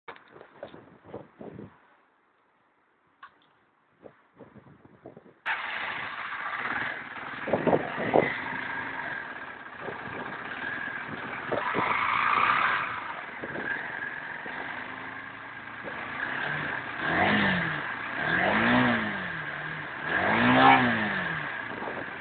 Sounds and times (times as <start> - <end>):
Idling: 5.5 - 17.2, 21.4 - 22.2
Motorcycle: 5.5 - 22.2.